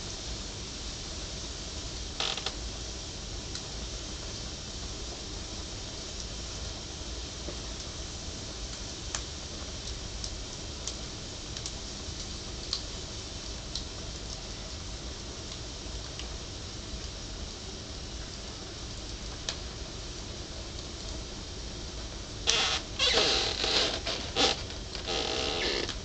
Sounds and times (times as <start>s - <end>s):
Fire: 0.0s - 26.0s.